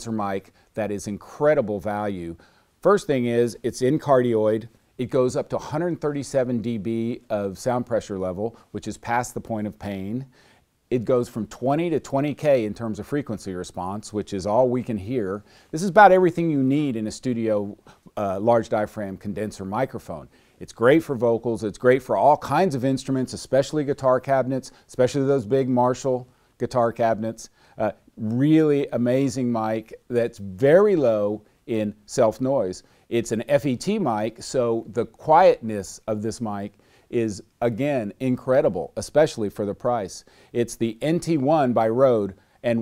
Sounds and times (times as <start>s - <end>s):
Speech: 0.0s - 42.8s.